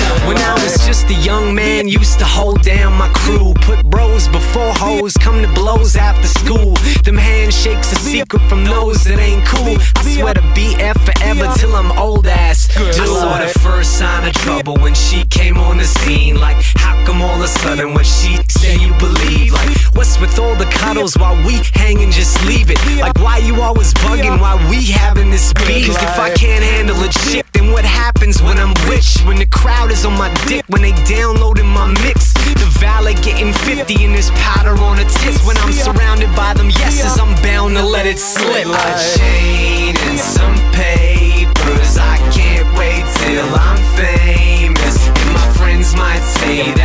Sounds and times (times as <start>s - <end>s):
Dance music: 0.0s - 46.8s
Pop music: 0.0s - 46.8s.